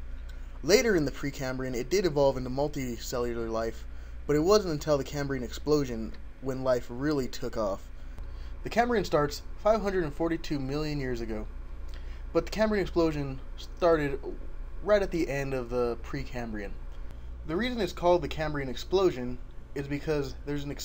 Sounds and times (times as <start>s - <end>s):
Speech: 0.6s - 7.9s, 8.6s - 11.5s, 12.4s - 16.8s, 17.5s - 20.8s.